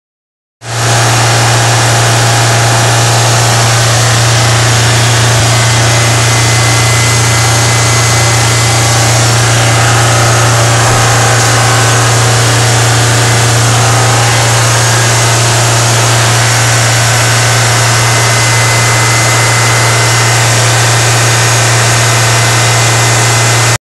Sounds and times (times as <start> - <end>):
Static: 0.7 - 23.8.